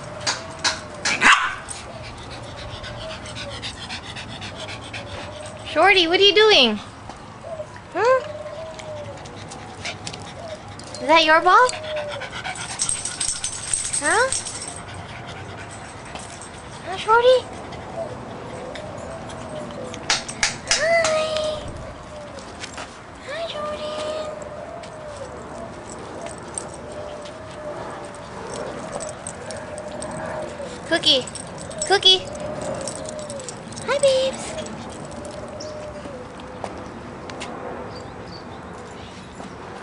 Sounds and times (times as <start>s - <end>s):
Domestic animals, pets: 0.0s - 5.8s, 7.4s - 16.0s, 23.6s - 37.0s.